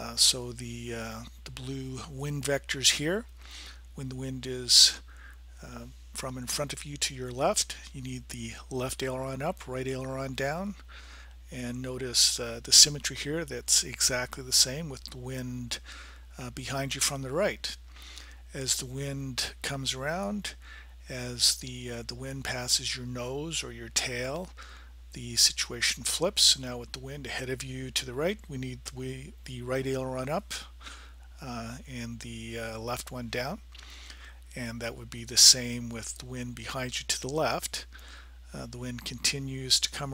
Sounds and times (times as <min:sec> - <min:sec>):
Speech: 0:00.0 - 0:03.3, 0:04.0 - 0:10.8, 0:11.5 - 0:15.8, 0:16.4 - 0:17.8, 0:18.5 - 0:30.8, 0:31.4 - 0:33.7, 0:34.5 - 0:37.9, 0:38.5 - 0:40.1.